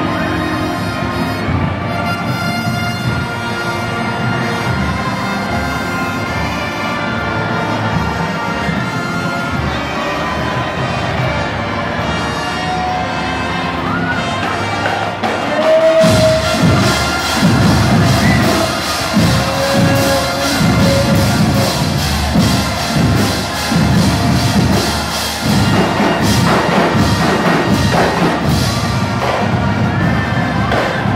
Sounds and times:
Music: 0.0 - 31.1.

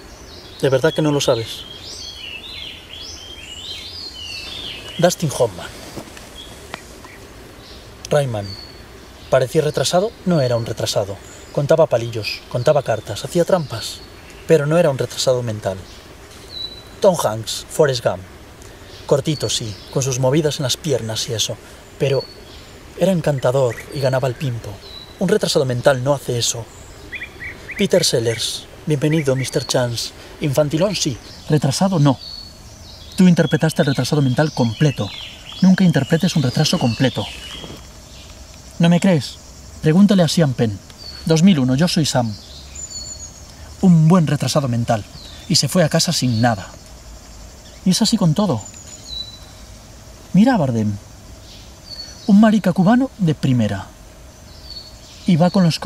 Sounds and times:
Environmental noise: 0.0 - 55.8.

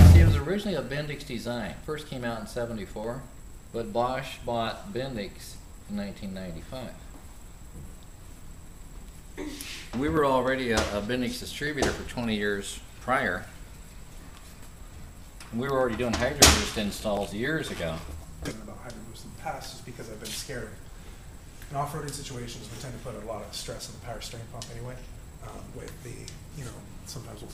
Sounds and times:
Speech: 0.0 - 7.0, 15.5 - 20.8, 21.7 - 27.5.

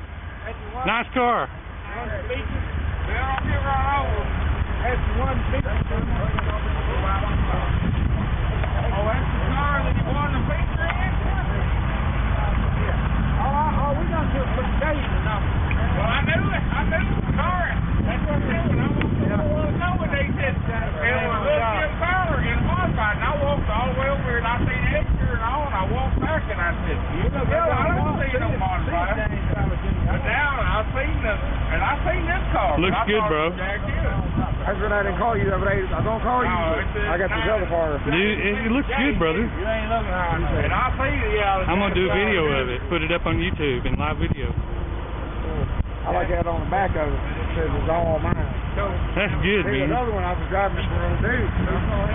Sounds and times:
Speech: 0.4 - 7.8, 8.5 - 44.6, 45.5 - 52.1.

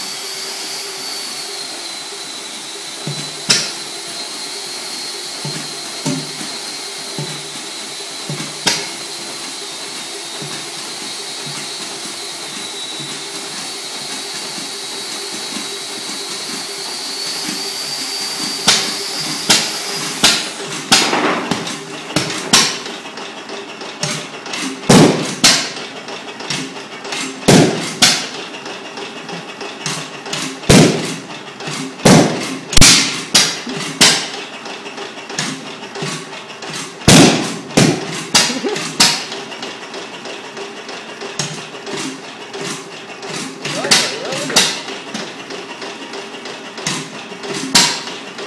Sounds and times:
Engine: 0.0 - 48.4.

